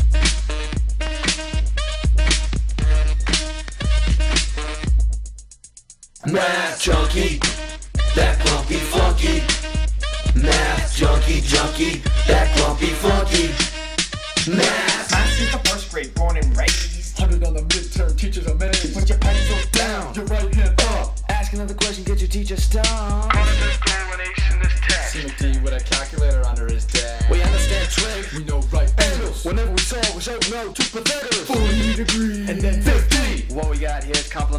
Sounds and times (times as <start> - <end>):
Music: 0.0 - 34.5.